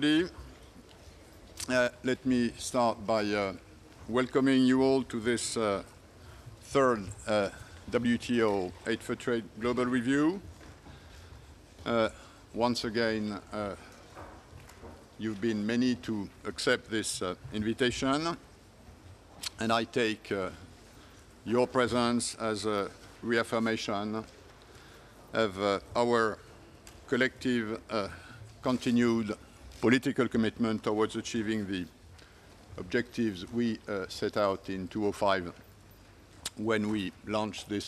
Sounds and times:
Male speech, man speaking: 0:00.0 - 0:00.5, 0:01.6 - 0:05.9, 0:06.6 - 0:10.5, 0:11.8 - 0:13.9, 0:15.2 - 0:18.4, 0:19.5 - 0:20.6, 0:21.4 - 0:24.3, 0:25.3 - 0:26.4, 0:27.1 - 0:32.0, 0:32.8 - 0:35.6, 0:36.5 - 0:37.8.

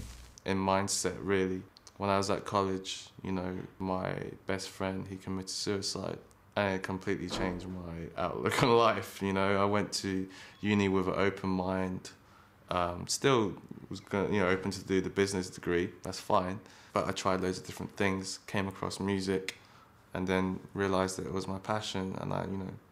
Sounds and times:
Speech: 0:00.4 - 0:19.5, 0:20.1 - 0:22.9.

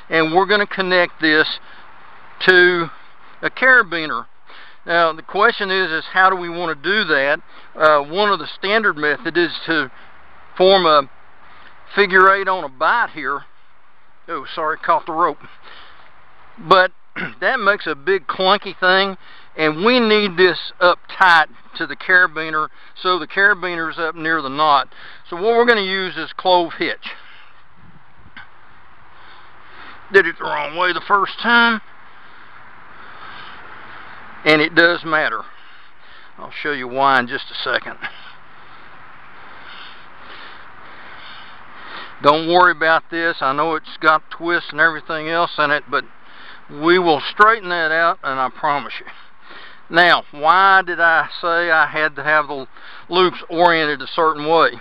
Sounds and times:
Outside, rural or natural: 0:00.0 - 0:54.8
Speech: 0:00.1 - 0:01.6, 0:02.4 - 0:04.3, 0:04.9 - 0:09.9, 0:10.6 - 0:11.1, 0:11.9 - 0:13.5, 0:14.3 - 0:15.5, 0:16.6 - 0:27.2, 0:30.1 - 0:31.8, 0:34.4 - 0:35.5, 0:36.4 - 0:38.1, 0:42.2 - 0:46.1, 0:46.7 - 0:49.2, 0:49.9 - 0:54.8.

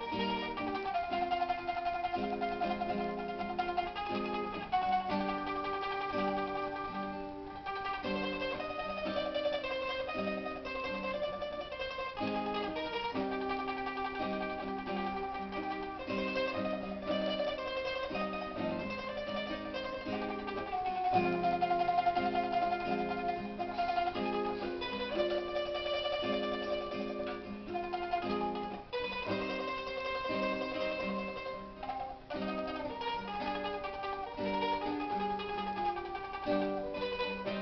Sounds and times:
Guitar: 0:00.0 - 0:37.6
Mandolin: 0:00.0 - 0:37.6
Zither: 0:00.0 - 0:37.6.

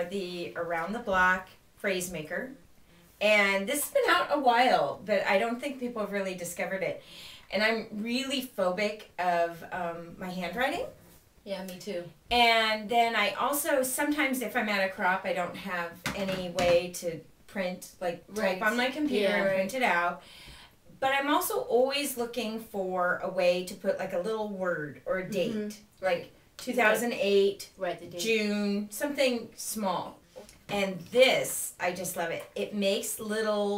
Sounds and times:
Speech: 0:00.0 - 0:02.6, 0:03.2 - 0:10.9, 0:11.5 - 0:20.2, 0:21.0 - 0:33.7.

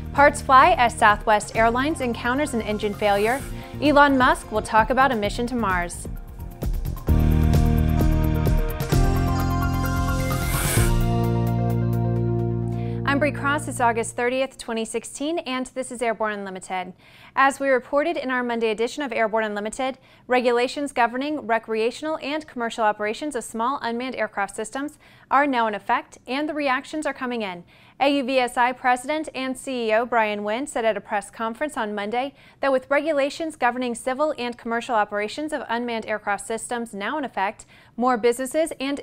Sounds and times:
Speech: 0:00.2 - 0:06.1, 0:13.1 - 0:39.0.

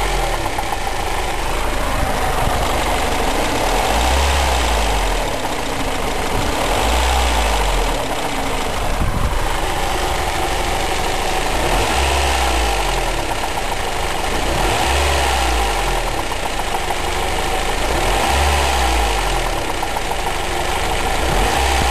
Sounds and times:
Engine knocking: 0:00.0 - 0:21.9.

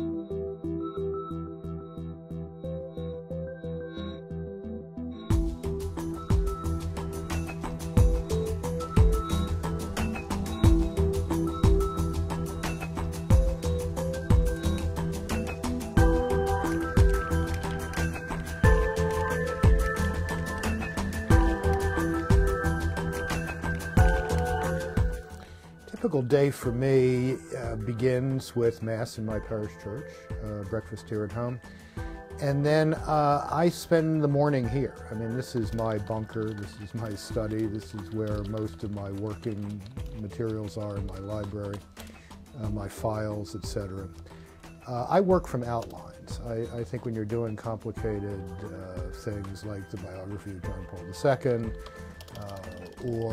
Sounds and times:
Music: 0:00.0 - 0:53.3
Speech: 0:26.0 - 0:31.6, 0:32.4 - 0:41.8, 0:42.6 - 0:44.1, 0:44.8 - 0:51.7, 0:52.4 - 0:53.3.

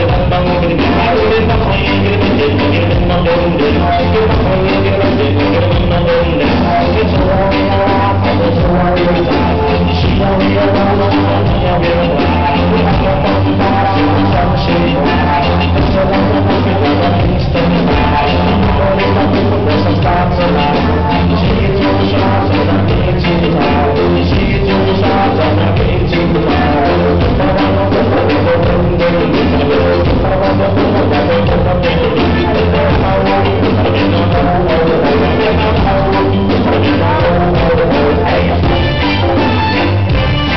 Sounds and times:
Music: 0:00.0 - 0:40.5.

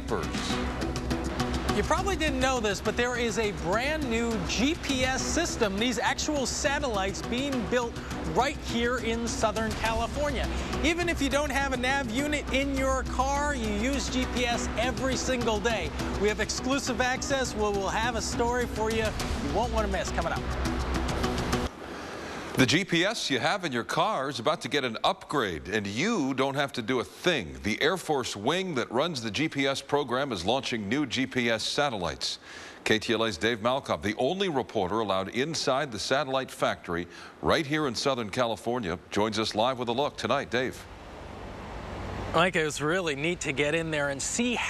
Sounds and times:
Speech: 0:00.0 - 0:00.6, 0:01.8 - 0:20.4, 0:22.6 - 0:40.8, 0:42.4 - 0:44.6
Music: 0:00.0 - 0:21.7.

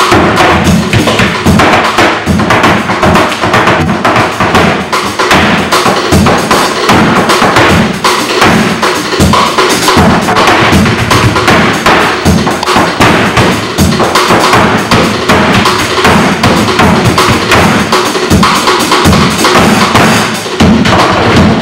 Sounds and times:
Flamenco: 0:00.0 - 0:21.6.

